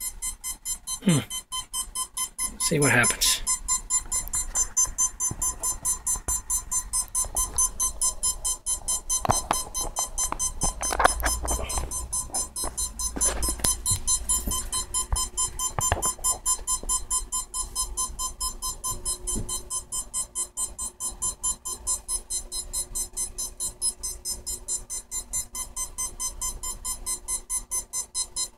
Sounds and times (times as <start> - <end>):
Speech: 2.6 - 3.5.